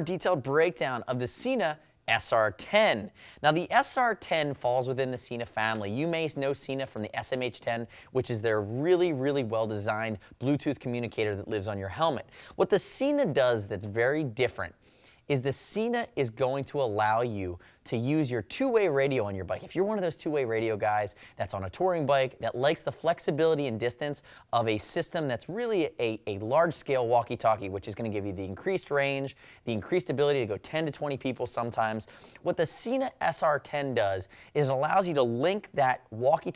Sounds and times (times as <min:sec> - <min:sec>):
Speech: 0:00.0 - 0:36.5.